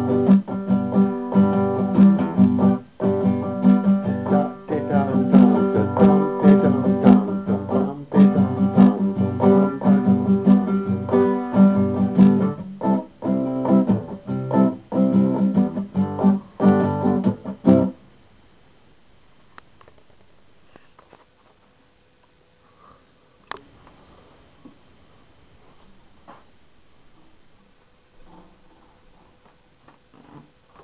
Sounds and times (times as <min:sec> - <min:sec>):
Acoustic guitar: 0:00.0 - 0:18.0
Inside, small room: 0:00.0 - 0:30.8.